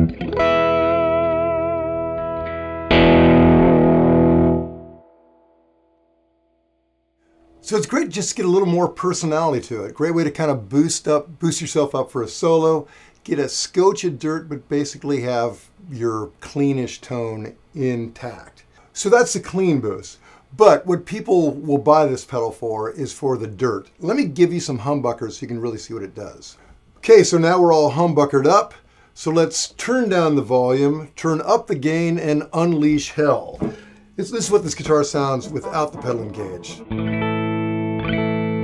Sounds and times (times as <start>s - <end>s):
Guitar: 0.0s - 9.7s, 31.1s - 38.6s
Inside, small room: 0.0s - 38.6s.